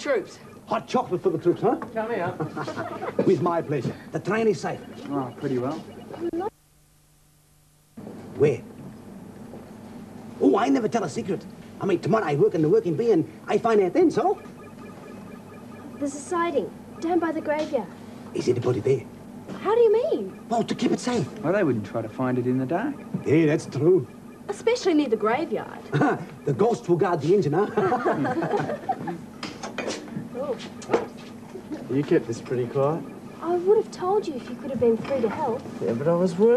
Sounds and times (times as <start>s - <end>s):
Laughter: 2.3s - 3.6s, 27.6s - 29.3s.